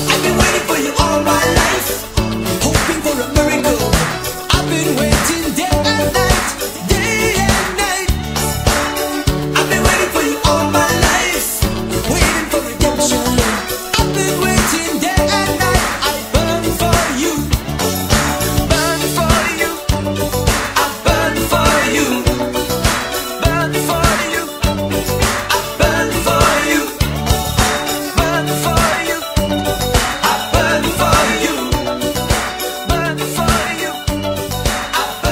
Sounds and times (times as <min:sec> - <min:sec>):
Music: 0:00.0 - 0:35.3.